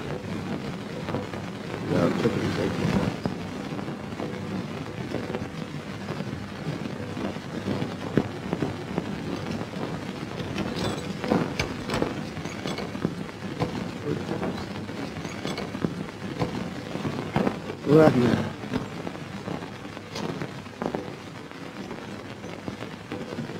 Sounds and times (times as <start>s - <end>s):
Speech: 1.8s - 3.2s, 14.0s - 14.6s, 17.8s - 18.6s.